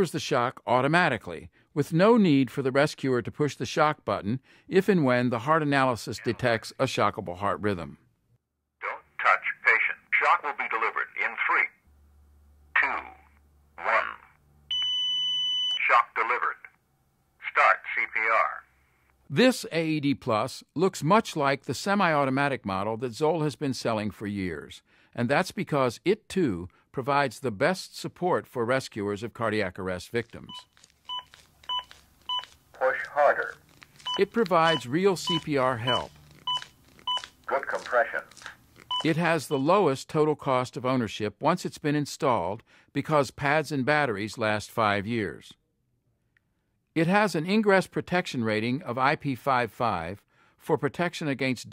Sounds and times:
Speech: 0.0s - 8.0s, 8.8s - 11.8s, 12.8s - 14.3s, 15.8s - 16.7s, 17.4s - 18.7s, 19.3s - 30.6s, 32.8s - 33.6s, 34.2s - 36.1s, 37.5s - 38.4s, 39.0s - 45.6s, 47.0s - 51.7s.

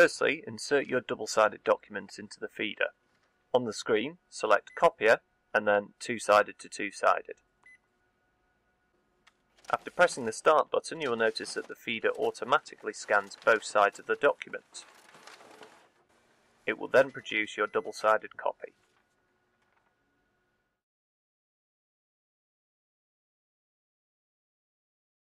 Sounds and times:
Speech: 0.0s - 3.0s, 3.6s - 7.4s, 9.7s - 14.9s, 16.7s - 18.8s.

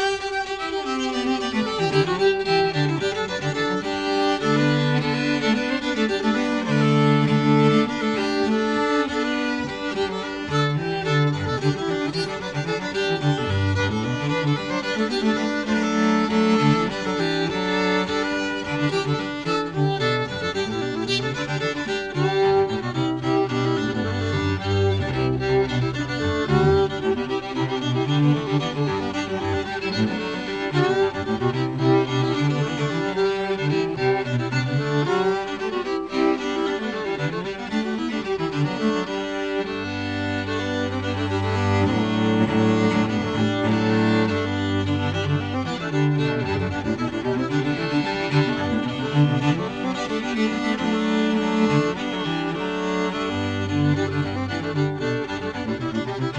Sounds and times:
Violin, fiddle: 0.0s - 56.3s.

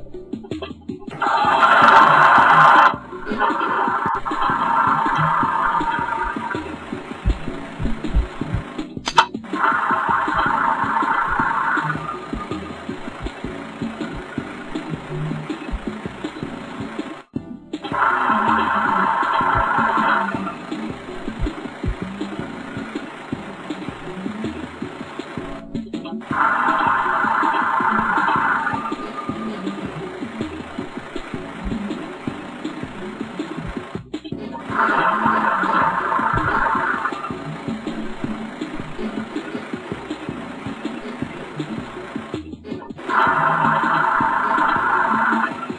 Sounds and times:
Music: 0.0s - 45.7s
Truck: 0.0s - 45.7s.

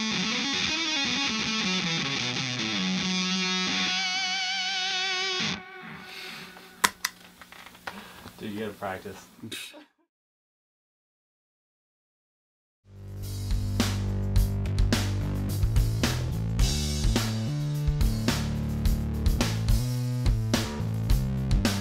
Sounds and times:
Music: 0.0s - 6.8s, 12.9s - 21.8s
Speech: 8.4s - 9.9s.

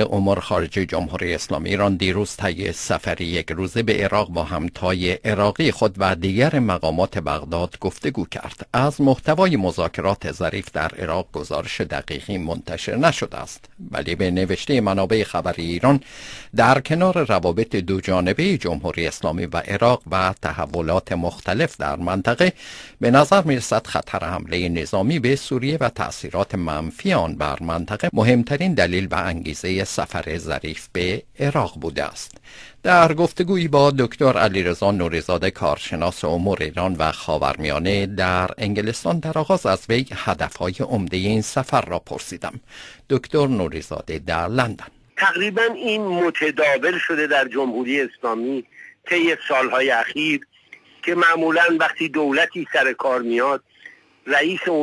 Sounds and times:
Speech: 0.0s - 16.0s, 16.6s - 53.7s, 54.3s - 54.8s.

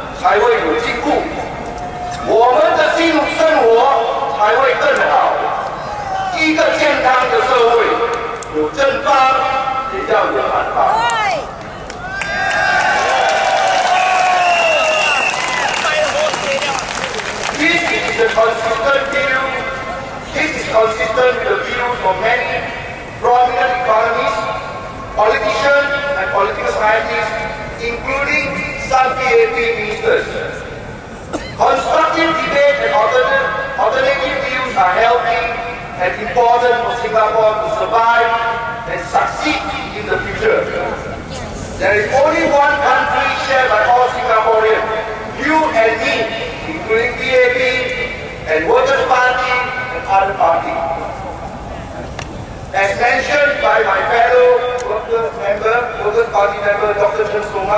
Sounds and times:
Male speech, man speaking: 0.0s - 1.4s, 2.2s - 5.6s, 6.3s - 11.3s, 15.7s - 24.6s, 25.2s - 30.7s, 31.6s - 41.1s, 41.8s - 51.2s, 52.7s - 57.7s
Narration, monologue: 0.0s - 11.7s, 16.0s - 57.7s.

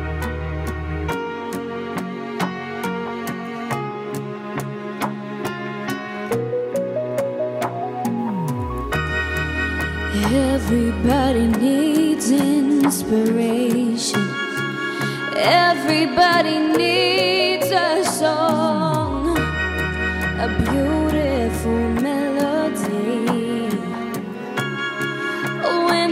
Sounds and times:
Music: 0.0s - 26.1s
Female singing: 10.2s - 14.5s, 15.3s - 19.5s, 20.4s - 24.1s, 25.6s - 26.1s.

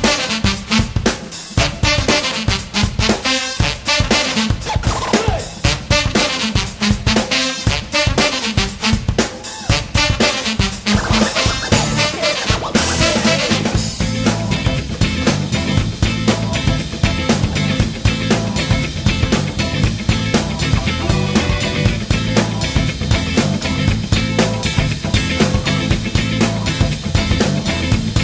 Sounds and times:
Music: 0.0s - 28.2s.

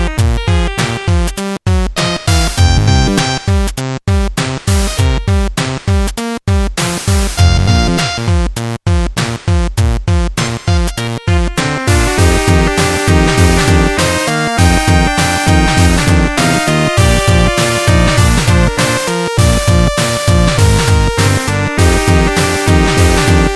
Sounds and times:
Music: 0.0s - 23.5s.

